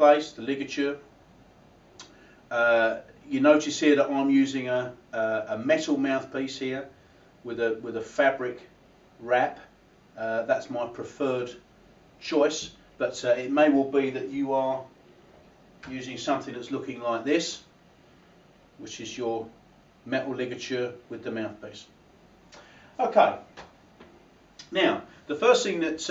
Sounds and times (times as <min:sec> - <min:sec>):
Speech: 0:00.0 - 0:01.1, 0:02.5 - 0:11.6, 0:12.2 - 0:14.9, 0:15.8 - 0:17.7, 0:18.8 - 0:22.0, 0:23.0 - 0:23.5, 0:24.6 - 0:26.1.